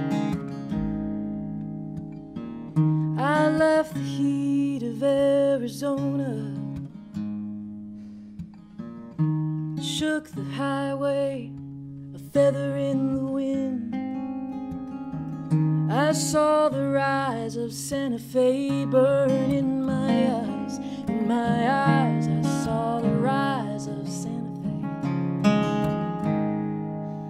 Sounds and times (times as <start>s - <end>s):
Acoustic guitar: 0.0s - 27.2s.